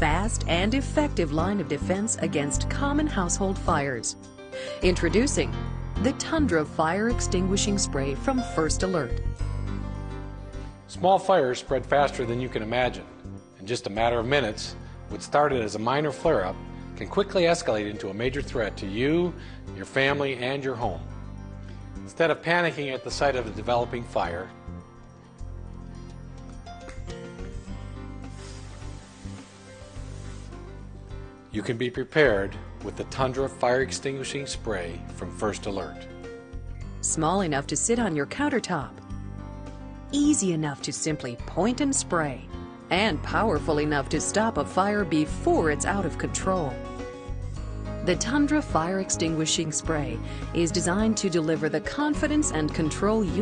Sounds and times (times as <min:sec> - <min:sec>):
Music: 0:00.0 - 0:53.4
Spray: 0:27.5 - 0:30.8.